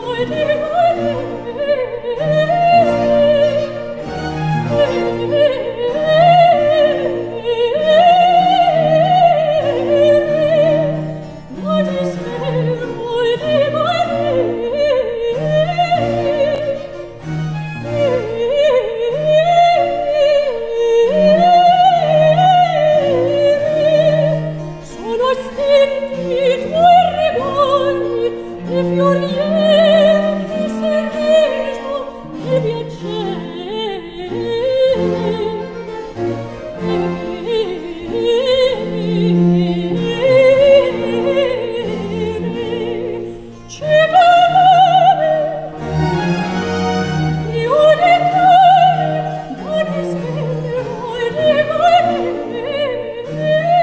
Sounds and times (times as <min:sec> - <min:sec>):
Opera: 0:00.0 - 0:53.8.